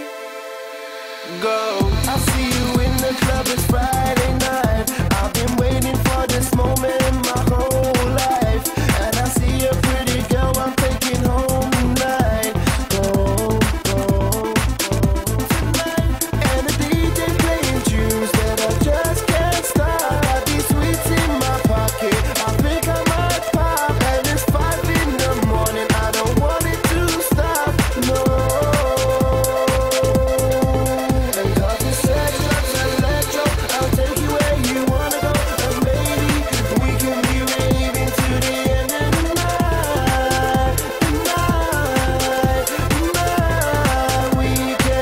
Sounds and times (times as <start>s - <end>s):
Soundtrack music: 0.0s - 45.0s.